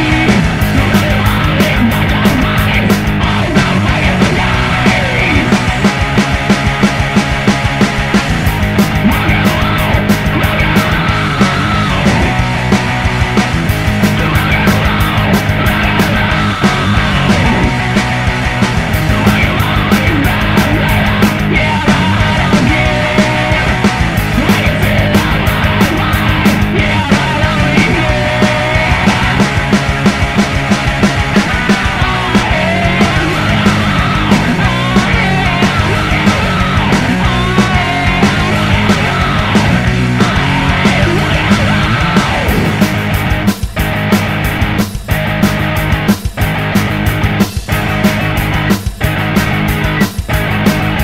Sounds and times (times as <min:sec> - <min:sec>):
Rock and roll: 0:00.0 - 0:51.0.